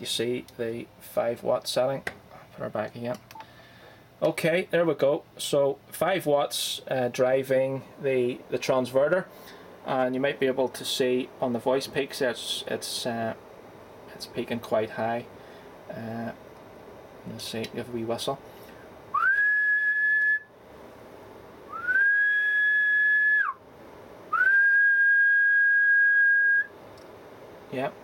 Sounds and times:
Whistling: 19.1 - 20.5, 21.7 - 23.6, 24.3 - 26.7.

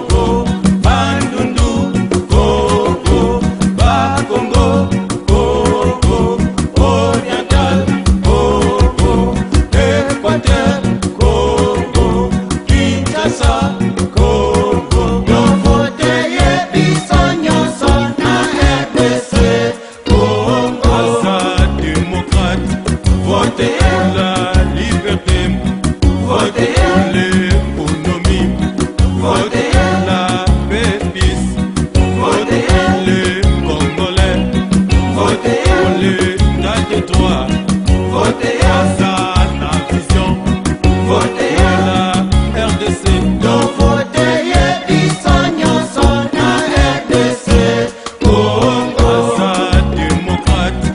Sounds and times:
Jingle (music): 0.0 - 50.9.

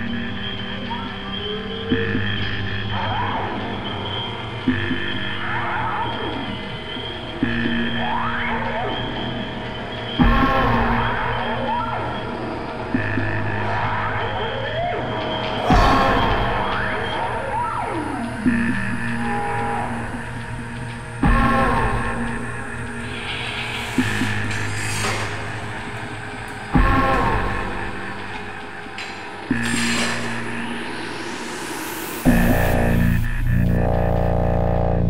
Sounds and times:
Noise: 0.0 - 35.0.

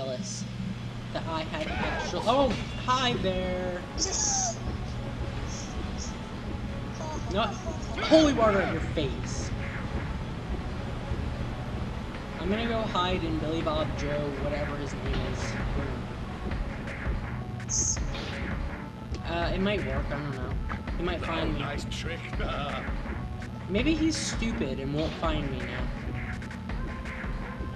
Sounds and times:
Speech: 0.0 - 0.5, 1.2 - 4.6, 7.0 - 9.5, 12.4 - 16.0, 19.2 - 22.9, 23.7 - 26.0
Music: 0.0 - 27.7.

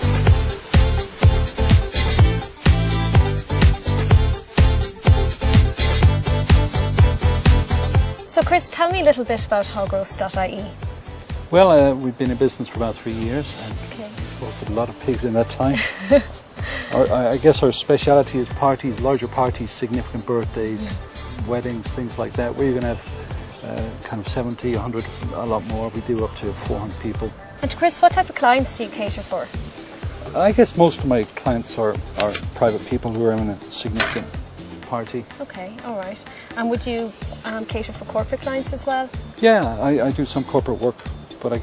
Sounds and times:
Music: 0.0 - 41.6.

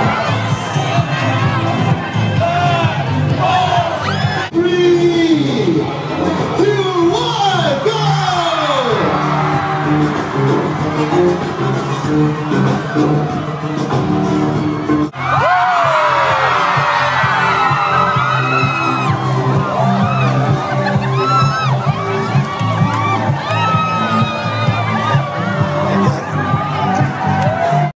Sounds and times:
Music: 0.0 - 27.9.

